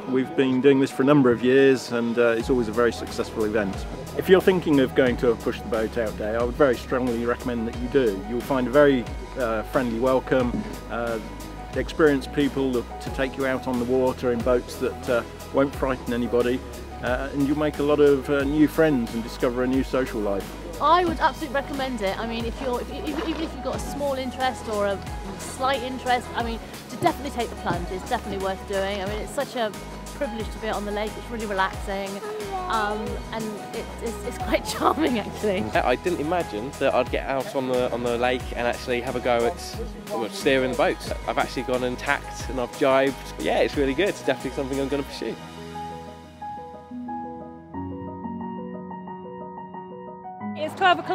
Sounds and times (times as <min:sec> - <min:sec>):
Music: 0:00.0 - 0:51.1.